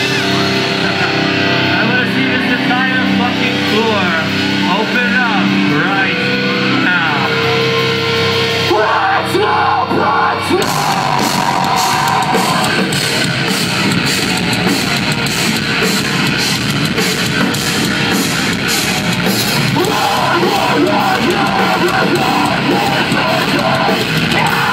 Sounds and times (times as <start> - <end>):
Music: 0.0 - 24.7.